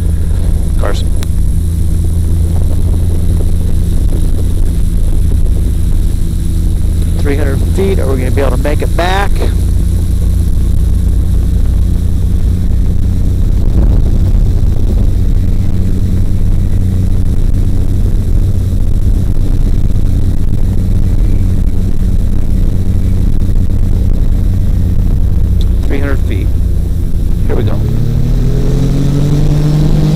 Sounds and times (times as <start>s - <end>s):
Propeller, airscrew: 0.0s - 30.1s.